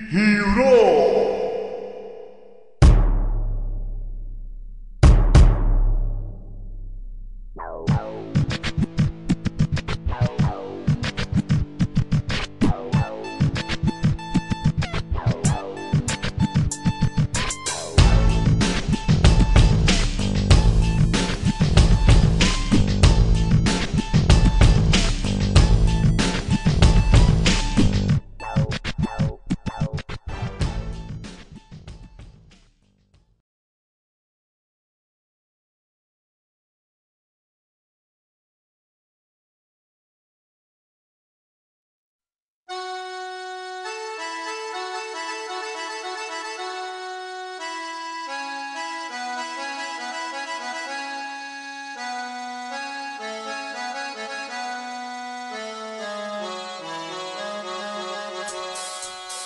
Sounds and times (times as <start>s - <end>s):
Music: 2.8s - 33.4s, 42.7s - 59.4s.